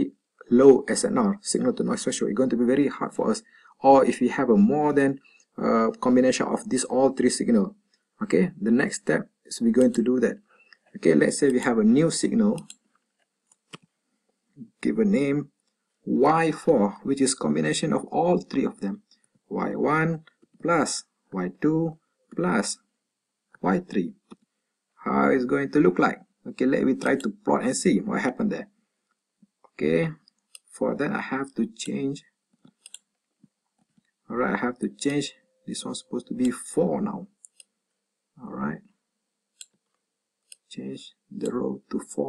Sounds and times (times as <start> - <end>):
Speech: 0.0 - 10.4, 11.0 - 12.7, 14.6 - 15.5, 16.1 - 22.8, 23.6 - 24.2, 25.0 - 28.7, 29.8 - 32.2, 34.3 - 37.4, 38.4 - 38.8, 40.7 - 42.2
Inside, small room: 0.0 - 42.2
Clicking: 12.6 - 13.8, 32.7 - 33.1, 37.4 - 37.8, 39.6 - 40.7.